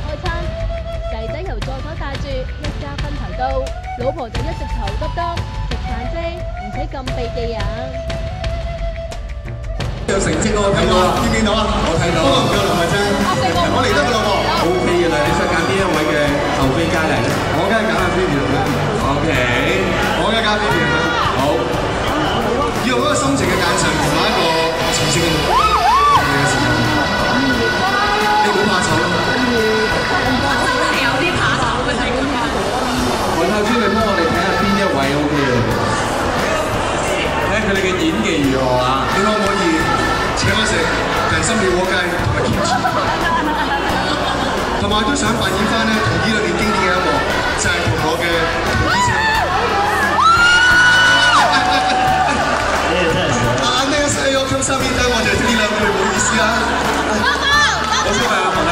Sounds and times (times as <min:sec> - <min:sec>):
Crowd: 0:00.0 - 0:58.7
Music: 0:00.0 - 0:58.7
Singing: 0:10.4 - 0:58.7.